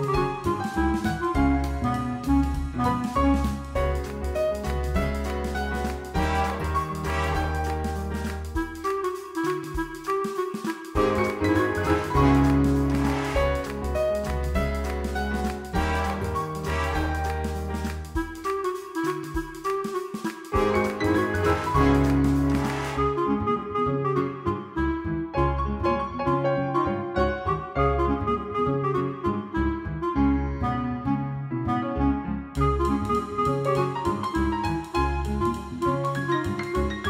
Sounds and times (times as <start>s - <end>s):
Music: 0.0s - 37.1s.